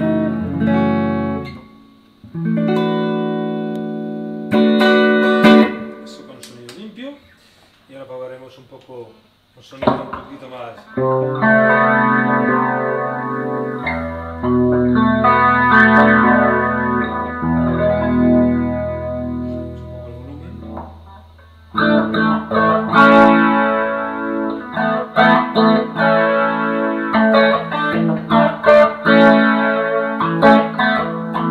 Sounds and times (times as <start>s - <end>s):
Bass guitar: 0.0s - 6.1s, 10.9s - 31.5s
Electric guitar: 0.0s - 6.8s, 9.8s - 31.5s
Speech: 6.0s - 7.3s, 7.9s - 10.9s, 20.0s - 20.8s.